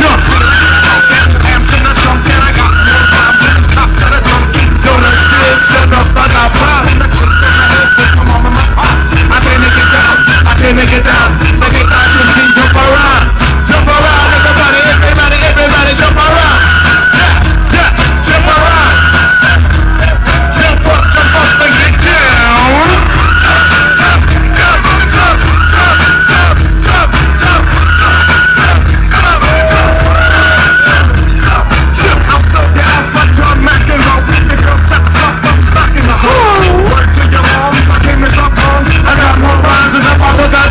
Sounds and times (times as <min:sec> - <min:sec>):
Dance music: 0:00.0 - 0:40.7.